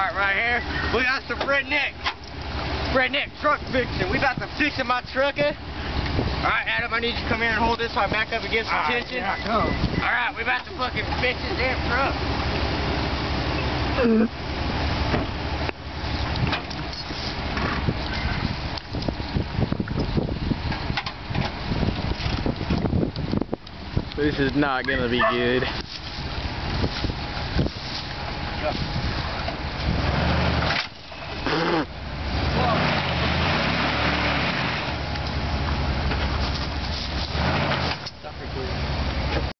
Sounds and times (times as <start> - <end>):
Speech: 0.0 - 2.0, 2.9 - 5.6, 6.4 - 12.2, 24.2 - 25.8, 32.6 - 32.9, 38.2 - 38.8
Car: 0.0 - 39.5.